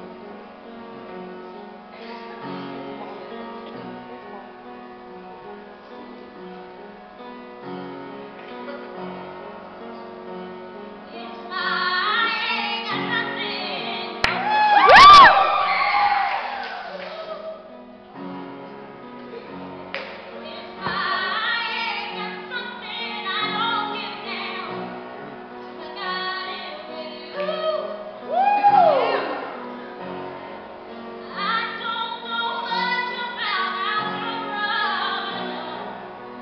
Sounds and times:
Music: 0:00.0 - 0:36.4
Female singing: 0:11.1 - 0:14.2, 0:20.5 - 0:24.7, 0:25.8 - 0:28.0, 0:31.3 - 0:35.8.

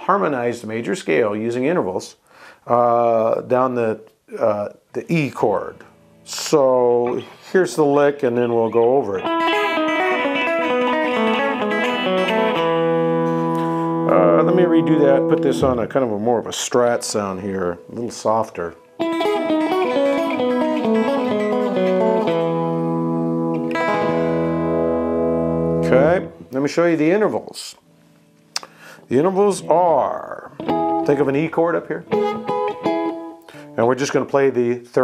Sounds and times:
Speech: 0:00.0 - 0:09.3, 0:14.1 - 0:18.8, 0:25.8 - 0:27.8, 0:29.1 - 0:32.1, 0:33.8 - 0:35.0
Strum: 0:05.6 - 0:34.4
Acoustic guitar: 0:09.1 - 0:16.6, 0:18.3 - 0:26.5.

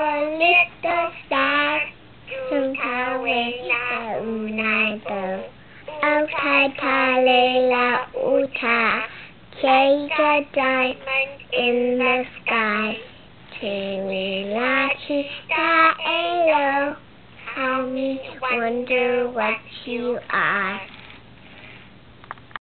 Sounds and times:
Child singing: 0:00.0 - 0:21.0.

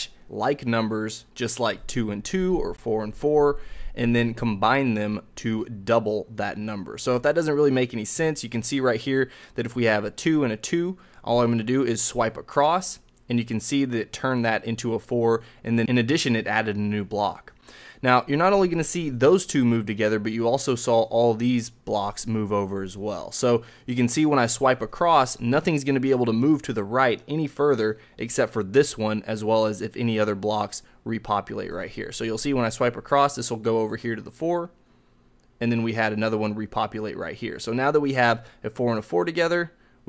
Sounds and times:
Speech: 0:00.0 - 0:34.8, 0:35.6 - 0:40.0
Inside, small room: 0:00.0 - 0:40.0.

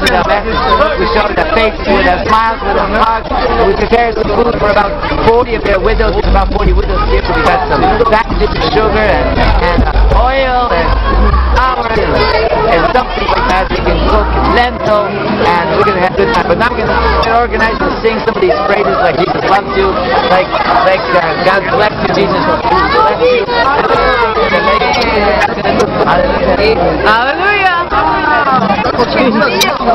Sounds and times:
Speech: 0:00.0 - 0:29.9.

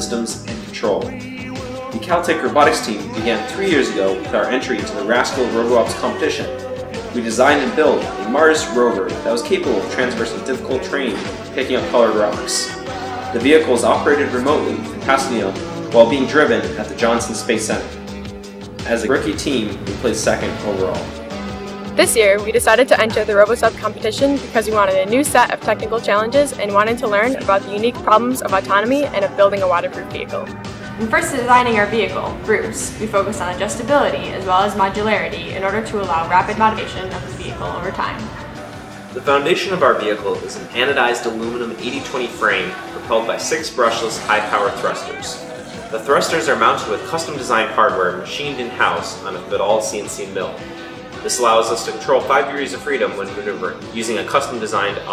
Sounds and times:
Speech: 0:00.0 - 0:01.2, 0:01.9 - 0:06.6, 0:07.2 - 0:12.8, 0:13.4 - 0:17.9, 0:18.8 - 0:21.1, 0:22.0 - 0:38.3, 0:39.2 - 0:50.6, 0:51.2 - 0:55.1
Music: 0:00.0 - 0:55.1.

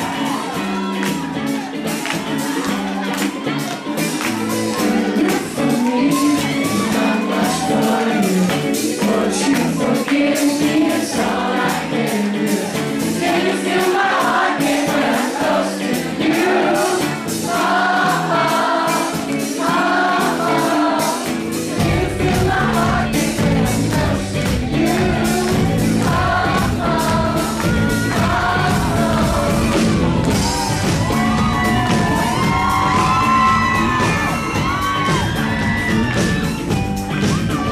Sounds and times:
Music: 0:00.0 - 0:37.7.

